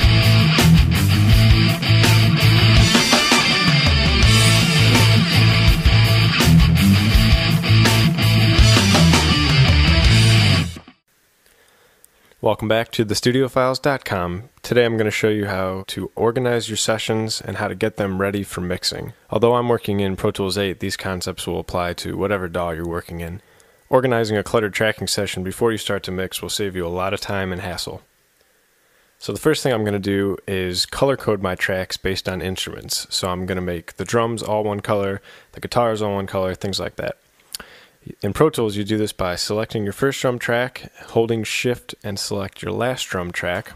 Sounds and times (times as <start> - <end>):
Speech: 12.4 - 28.1, 29.2 - 37.2, 38.0 - 43.7.